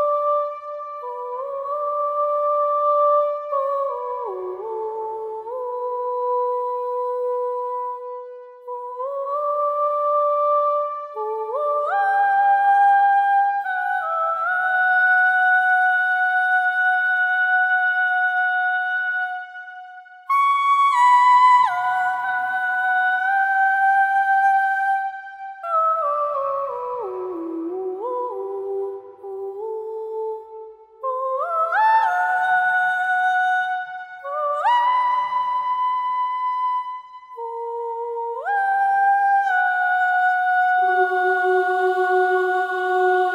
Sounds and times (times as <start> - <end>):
Music: 0.0 - 43.3.